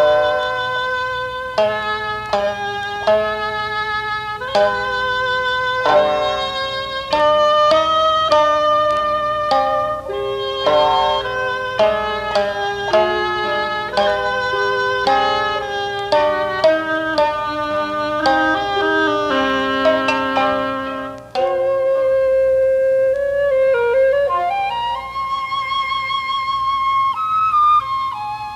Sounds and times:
Wind instrument, woodwind instrument: 0:00.0 - 0:28.5.

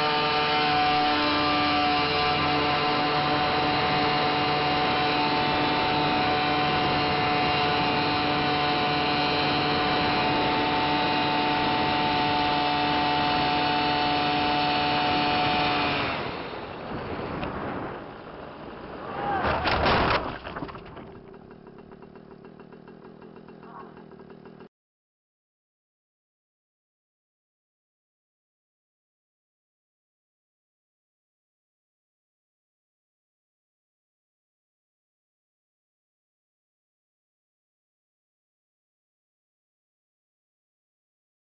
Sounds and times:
Vehicle: 0:00.0 - 0:24.7.

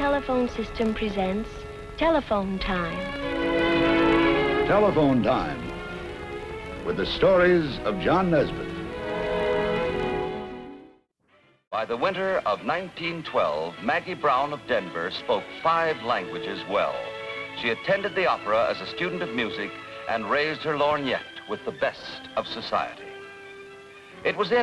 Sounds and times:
Speech: 0:00.0 - 0:03.0, 0:04.7 - 0:05.7, 0:06.9 - 0:08.7, 0:11.8 - 0:17.0, 0:17.6 - 0:23.0, 0:24.2 - 0:24.6
Music: 0:00.0 - 0:24.6.

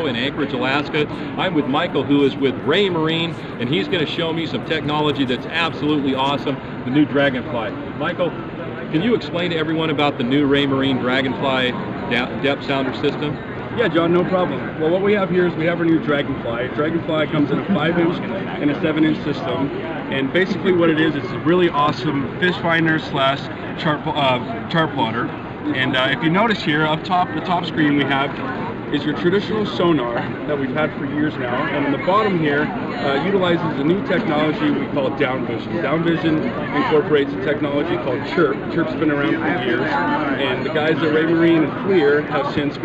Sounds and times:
Speech: 0:00.0 - 0:08.3, 0:08.9 - 0:42.8.

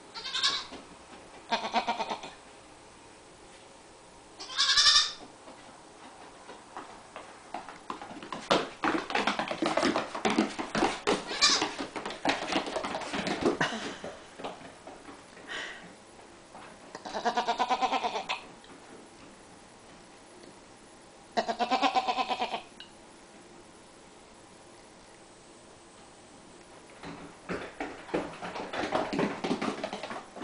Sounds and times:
Bleat: 0:00.2 - 0:00.7, 0:01.5 - 0:02.4, 0:04.4 - 0:05.2, 0:11.3 - 0:11.7, 0:17.0 - 0:18.5, 0:21.4 - 0:22.7.

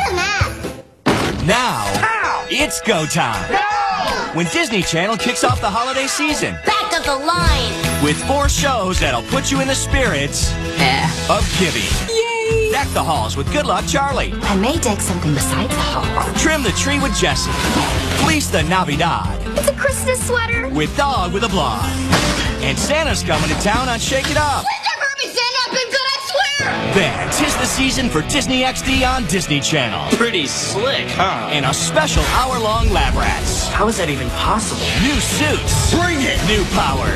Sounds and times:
Music: 0:00.0 - 0:37.1
Speech: 0:18.2 - 0:19.9, 0:22.6 - 0:37.1.

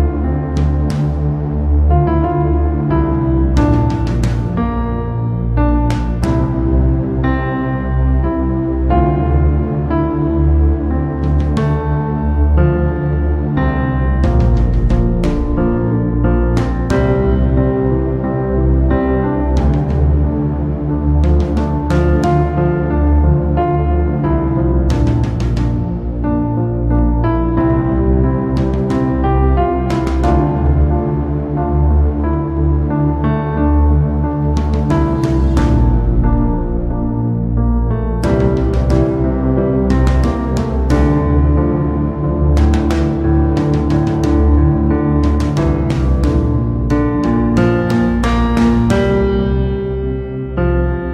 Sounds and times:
Ambient music: 0:00.0 - 0:51.1.

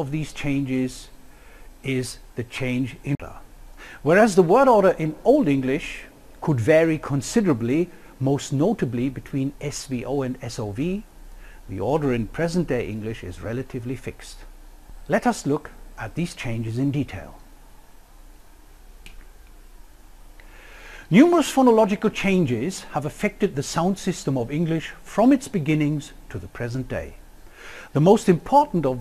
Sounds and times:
Speech: 0:00.0 - 0:01.2, 0:01.8 - 0:11.1, 0:11.7 - 0:14.5, 0:15.1 - 0:17.4, 0:21.1 - 0:27.2, 0:27.9 - 0:29.0
Inside, small room: 0:00.0 - 0:29.0.

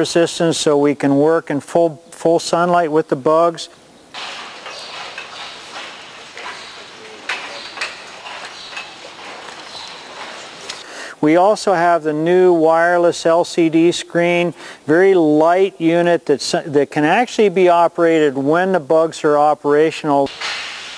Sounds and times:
Speech: 0:00.0 - 0:03.8, 0:11.2 - 0:20.3.

